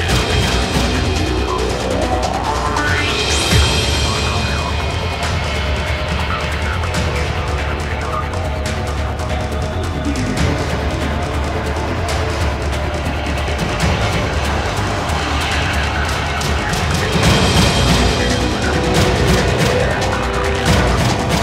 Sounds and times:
Electronic music: 0.0 - 21.4
Soundtrack music: 0.0 - 21.4.

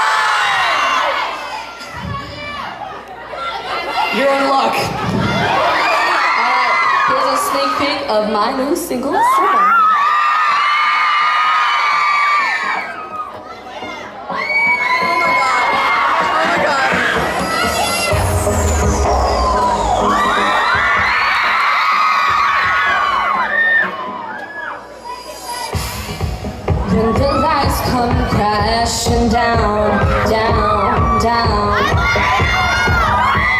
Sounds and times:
Music: 0.1 - 3.0, 4.2 - 33.5.

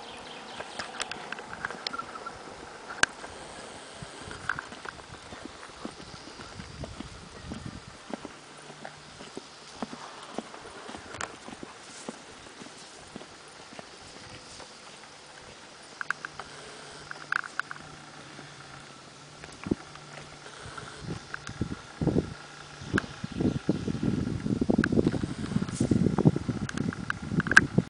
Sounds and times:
Clip-clop: 0.0 - 27.8.

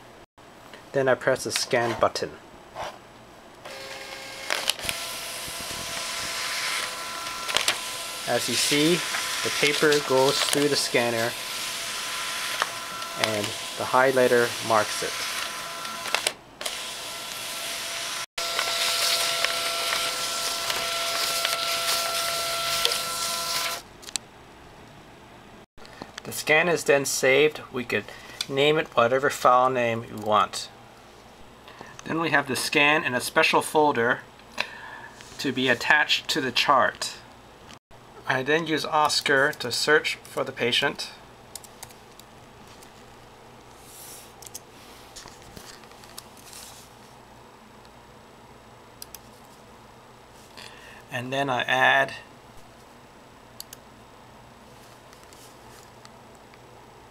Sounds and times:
Speech: 0.9 - 2.4, 8.3 - 11.4, 13.2 - 15.2, 26.2 - 30.8, 32.0 - 34.3, 35.4 - 37.3, 38.2 - 41.2, 51.1 - 52.3
Printer: 3.7 - 23.8.

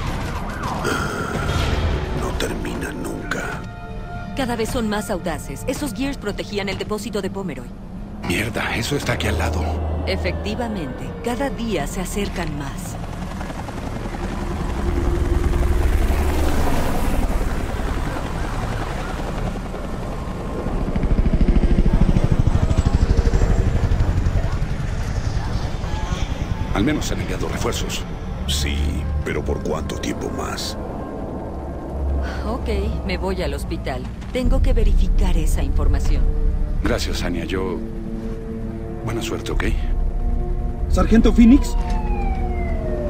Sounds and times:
Vehicle: 6.8 - 35.1.

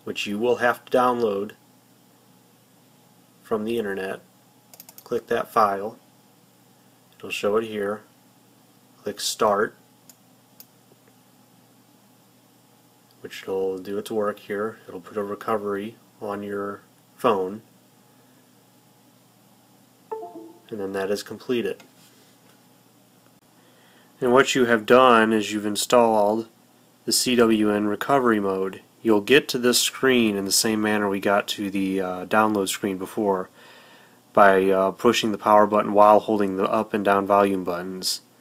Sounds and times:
Speech: 0.0 - 1.6, 3.4 - 4.3, 5.0 - 6.0, 7.2 - 8.1, 9.0 - 9.8, 13.2 - 17.7, 20.7 - 21.8, 24.2 - 33.5, 34.3 - 38.3
Inside, small room: 0.0 - 38.4.

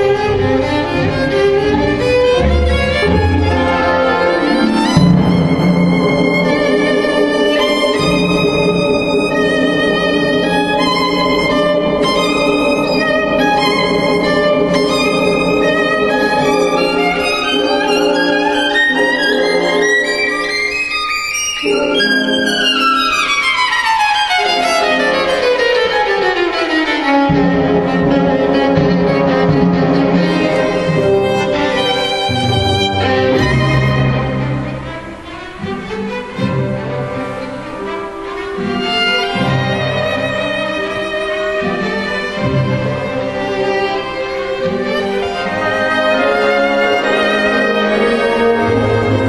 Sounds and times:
Violin, fiddle: 0.0 - 49.2.

